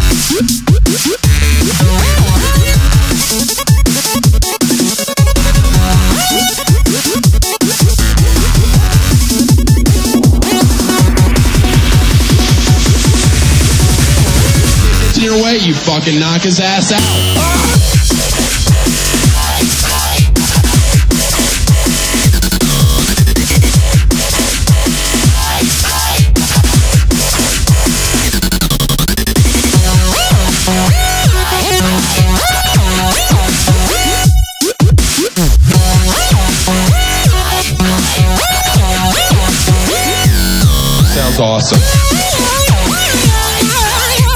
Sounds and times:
Dubstep: 0.0s - 44.3s.

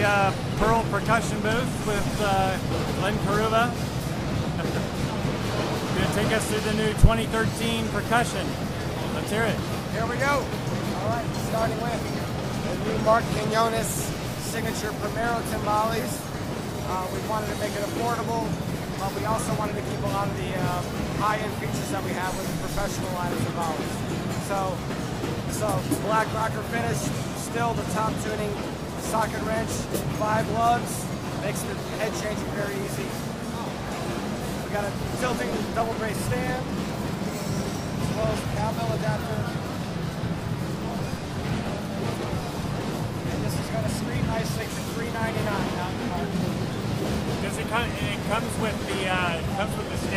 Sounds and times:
Speech: 0.0s - 3.8s, 5.9s - 24.8s, 25.5s - 33.3s, 34.6s - 36.7s, 38.1s - 39.7s, 43.3s - 46.6s, 47.4s - 50.1s.

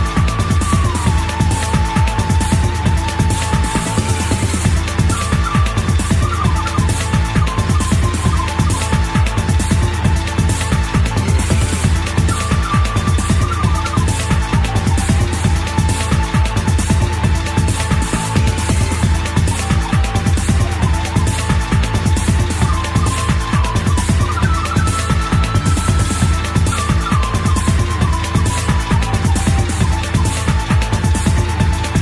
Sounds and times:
Music: 0.0s - 32.0s.

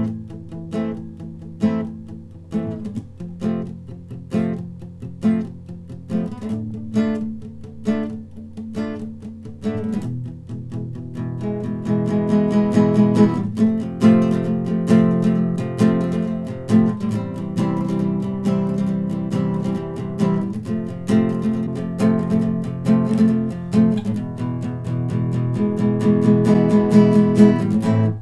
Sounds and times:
Acoustic guitar: 0.0s - 28.2s.

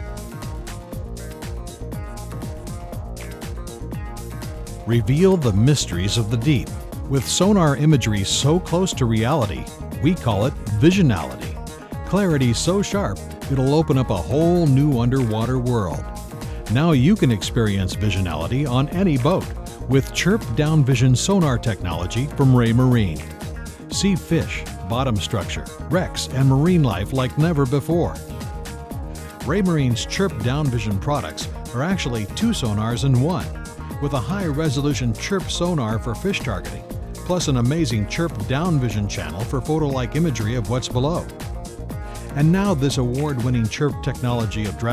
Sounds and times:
Music: 0.0s - 44.9s
Speech: 4.9s - 16.0s, 16.7s - 23.3s, 23.9s - 28.2s, 29.4s - 41.3s, 42.4s - 44.9s.

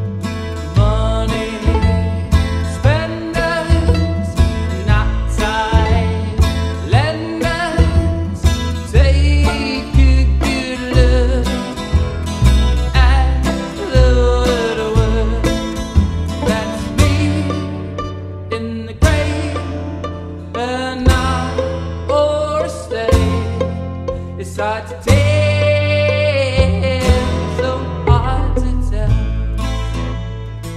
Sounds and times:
Acoustic guitar: 0.0s - 30.7s.

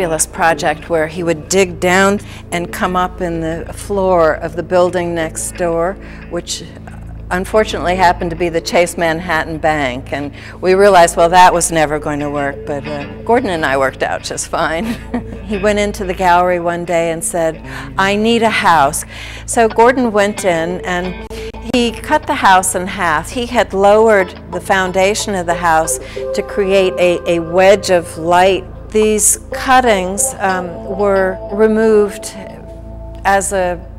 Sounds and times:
Music: 0.0s - 33.9s
Speech: 7.3s - 32.6s.

